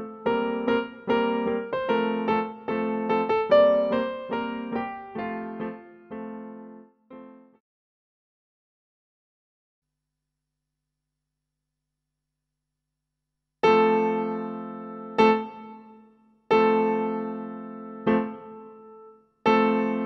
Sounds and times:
Music: 0:00.0 - 0:07.7, 0:13.6 - 0:20.0.

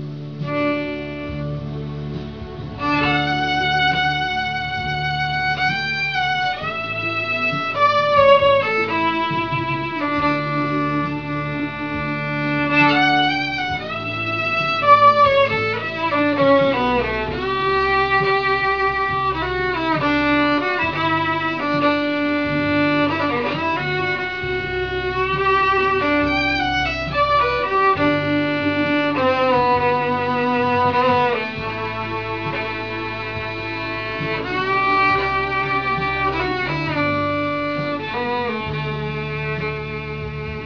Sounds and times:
Violin, fiddle: 0:00.0 - 0:40.6.

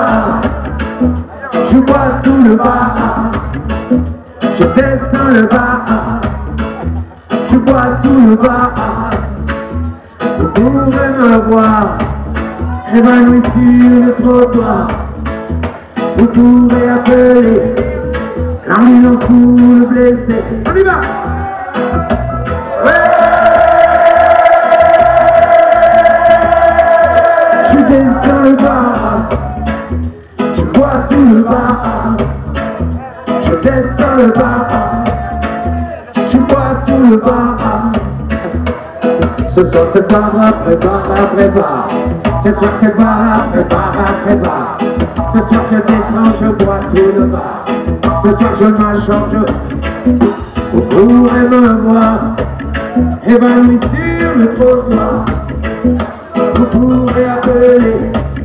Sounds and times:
Music: 0:00.0 - 0:58.4.

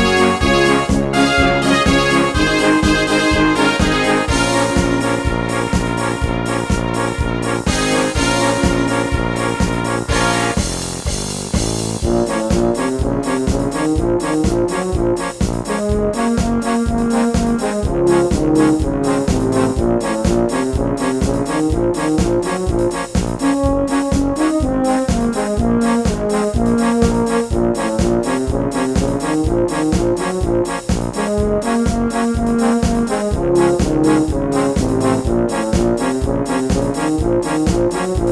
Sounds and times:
Brass instrument: 0:00.0 - 0:38.3.

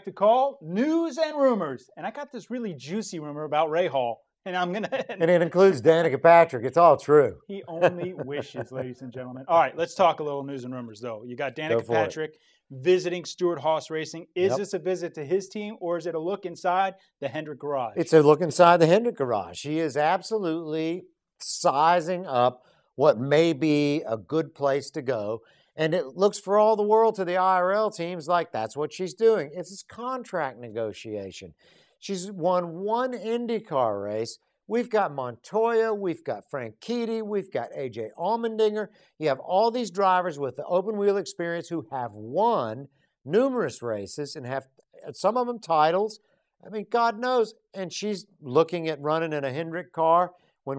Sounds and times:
Speech: 0:00.0 - 0:50.7.

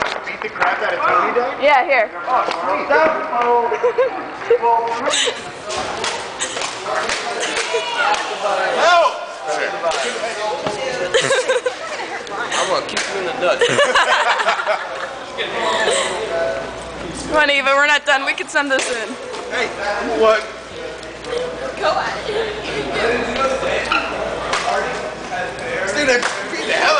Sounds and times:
Inside, large room or hall: 0:00.0 - 0:26.9.

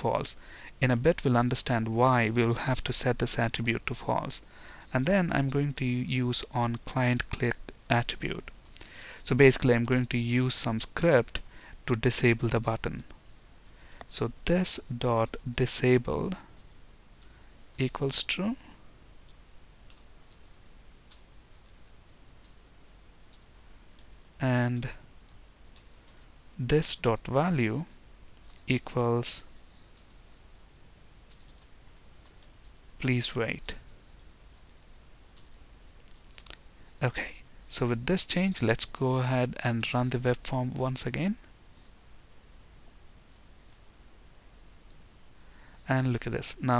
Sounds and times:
Speech: 0:00.0 - 0:08.5, 0:09.2 - 0:13.1, 0:14.1 - 0:16.4, 0:17.8 - 0:18.6, 0:24.4 - 0:25.0, 0:26.6 - 0:27.9, 0:28.7 - 0:29.5, 0:33.0 - 0:33.8, 0:37.0 - 0:41.5, 0:45.9 - 0:46.7
Clicking: 0:19.3 - 0:20.4.

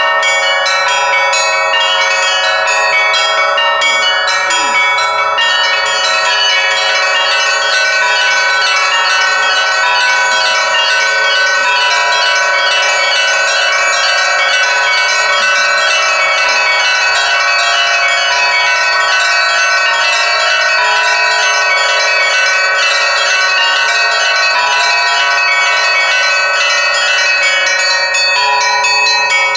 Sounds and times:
Bell: 0:00.0 - 0:29.5.

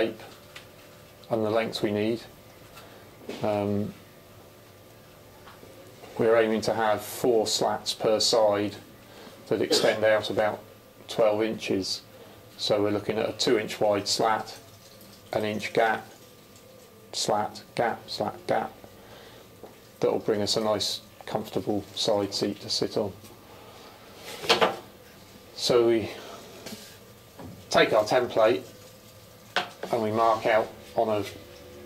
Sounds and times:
Speech: 0:00.0 - 0:00.4, 0:01.3 - 0:02.4, 0:03.3 - 0:04.0, 0:06.2 - 0:08.9, 0:09.5 - 0:14.6, 0:15.3 - 0:16.2, 0:17.1 - 0:18.8, 0:20.0 - 0:23.2, 0:25.6 - 0:26.3, 0:27.7 - 0:28.7, 0:29.8 - 0:31.4.

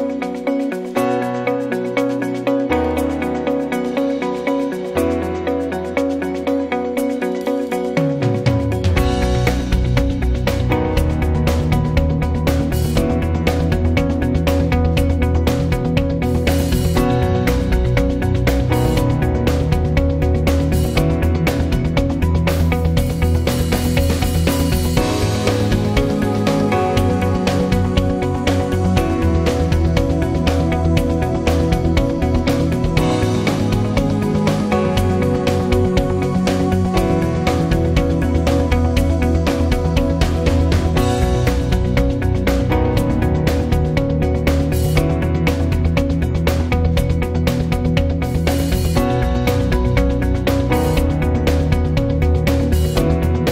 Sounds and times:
Music: 0:00.0 - 0:53.5.

